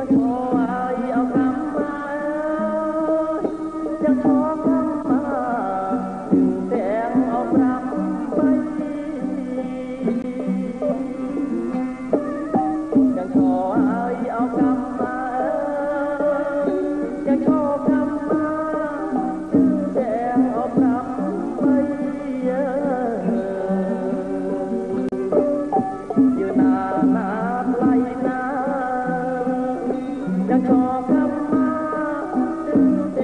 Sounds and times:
Folk music: 0.0s - 33.2s
Independent music: 0.0s - 33.2s
Traditional music: 0.0s - 33.2s.

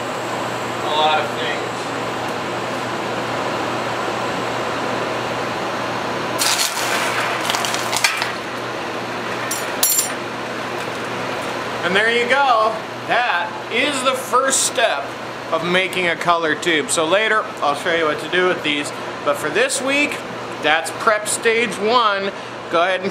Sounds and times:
Speech: 0.8s - 1.9s, 11.8s - 23.1s.

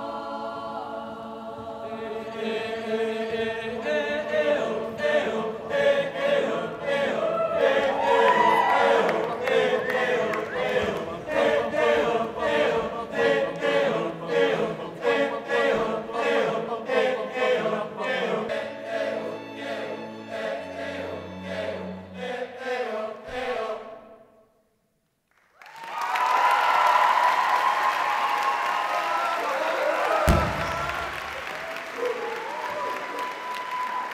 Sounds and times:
Singing: 0.0s - 24.3s.

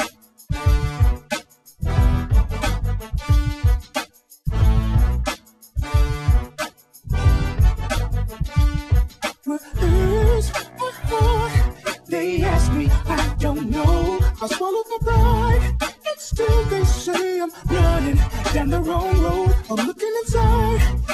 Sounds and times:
Rock and roll: 0.0s - 21.1s.

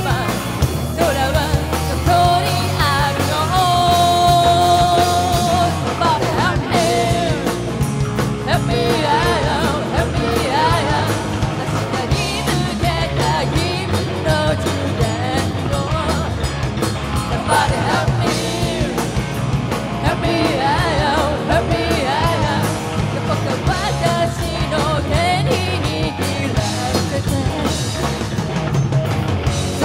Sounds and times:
Music: 0.0s - 29.8s.

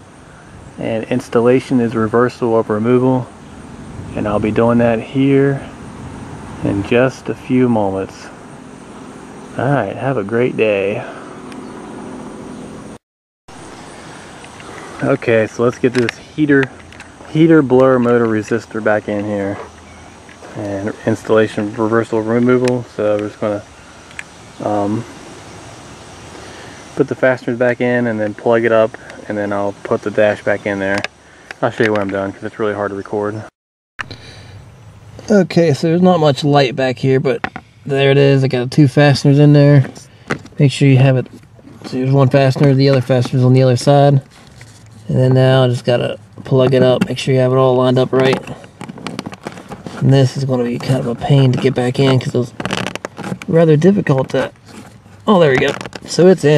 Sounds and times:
Speech: 0.8s - 3.3s, 4.1s - 5.8s, 6.6s - 8.4s, 9.6s - 11.2s, 15.0s - 19.7s, 20.4s - 23.7s, 24.6s - 25.1s, 27.0s - 33.5s, 35.2s - 44.3s, 45.0s - 48.7s, 49.9s - 52.7s, 53.4s - 54.6s, 55.3s - 56.5s.

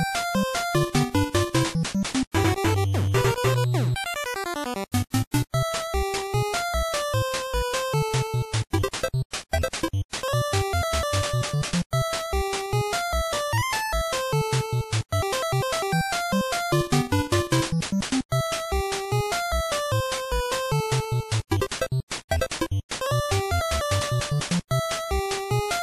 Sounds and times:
Funny music: 0.0s - 25.8s.

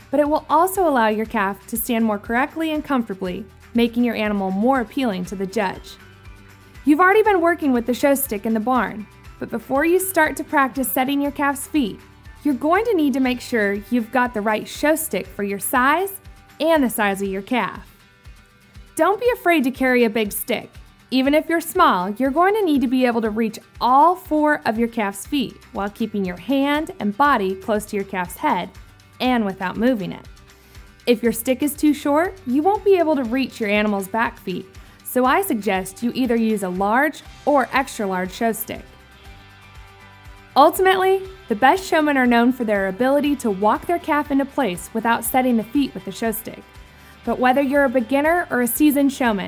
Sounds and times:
Music: 0.0s - 49.4s
Speech: 0.1s - 6.0s, 6.9s - 17.8s, 19.0s - 30.3s, 31.1s - 38.8s, 40.6s - 46.6s, 47.3s - 49.4s.

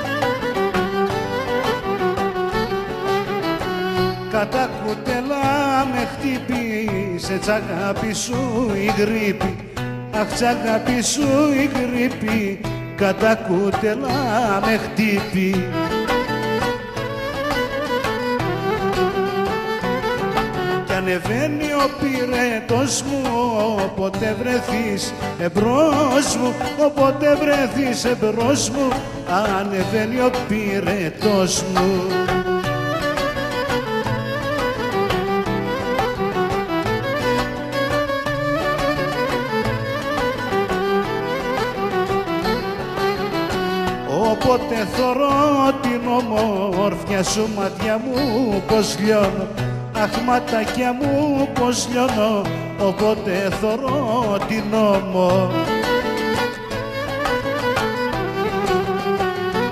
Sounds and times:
Music: 0.0s - 59.7s.

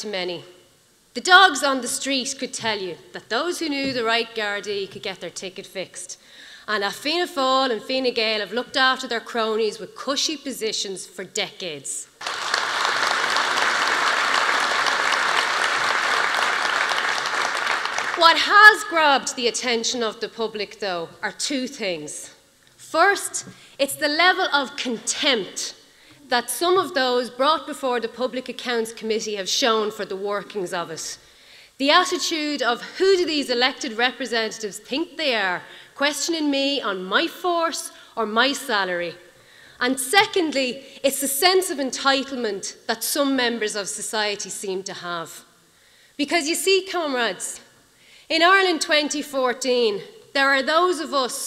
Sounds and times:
Female speech, woman speaking: 0.0s - 0.5s, 1.2s - 12.1s, 18.2s - 31.2s, 31.8s - 39.2s, 39.8s - 45.4s, 46.2s - 47.7s, 48.3s - 51.4s
Narration, monologue: 0.0s - 12.2s, 17.9s - 51.4s.

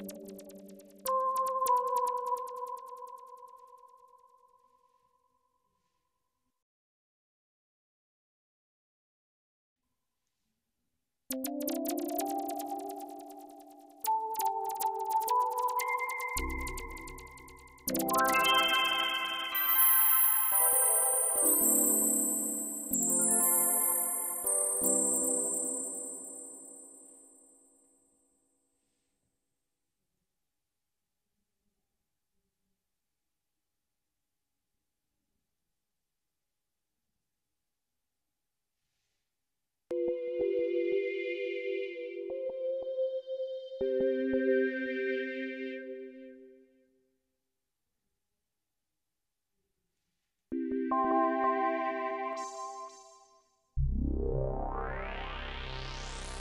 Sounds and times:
Music: 0.0s - 4.8s, 11.3s - 27.6s, 39.9s - 46.9s, 50.6s - 56.4s.

